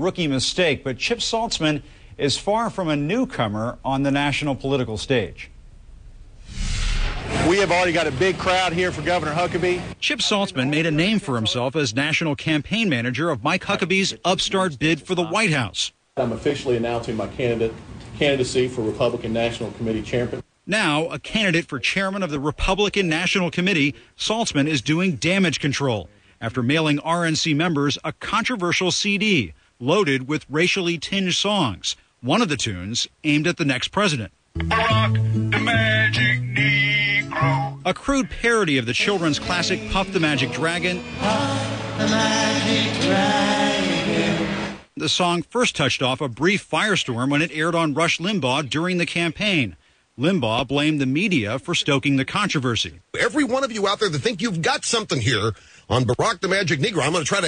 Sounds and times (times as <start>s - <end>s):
Male speech, man speaking: 0.0s - 5.5s, 7.4s - 34.9s, 37.4s - 41.0s, 45.0s - 57.4s
Narration, monologue: 0.0s - 35.5s, 37.8s - 41.2s, 44.9s - 57.4s.